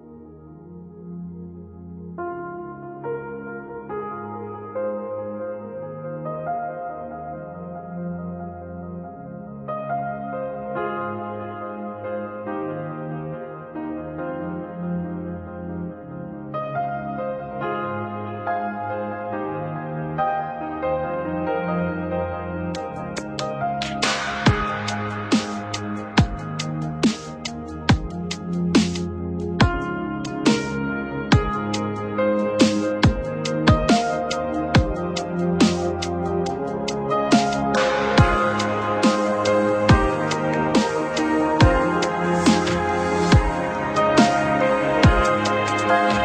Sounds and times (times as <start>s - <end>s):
Piano: 0.0s - 46.2s.